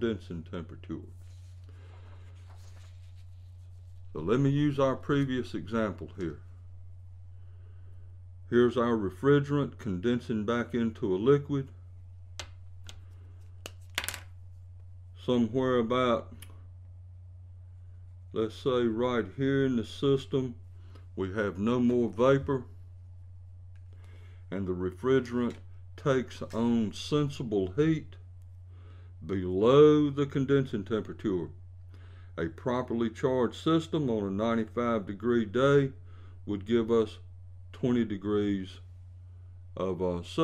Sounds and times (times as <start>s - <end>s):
Speech: 0.0s - 1.2s, 4.1s - 6.5s, 8.5s - 11.8s, 15.2s - 16.6s, 18.4s - 20.6s, 21.2s - 22.8s, 24.5s - 28.2s, 29.2s - 31.6s, 32.4s - 38.9s, 39.8s - 40.4s.